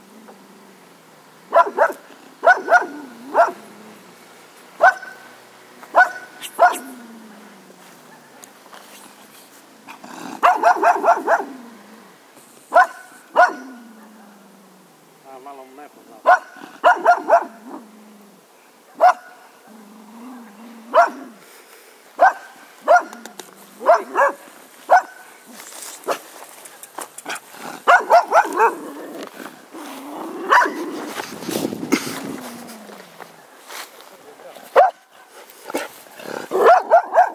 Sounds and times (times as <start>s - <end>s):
Bark: 1.5s - 3.6s, 4.8s - 5.2s, 5.9s - 6.9s, 10.4s - 11.5s, 12.7s - 14.3s, 16.2s - 17.6s, 18.9s - 19.4s, 20.9s - 21.3s, 22.2s - 23.2s, 23.8s - 25.2s, 27.9s - 28.8s, 30.5s - 30.8s, 34.8s - 35.1s, 36.5s - 37.3s
Bow-wow: 1.5s - 3.6s, 4.8s - 5.2s, 5.9s - 7.0s, 10.4s - 11.6s, 12.7s - 14.4s, 16.2s - 17.8s, 19.0s - 19.4s, 20.9s - 21.4s, 22.2s - 23.2s, 23.8s - 25.2s, 27.8s - 28.9s, 30.4s - 30.8s, 34.8s - 35.0s, 36.4s - 37.3s
Speech: 15.2s - 16.3s, 34.0s - 34.8s.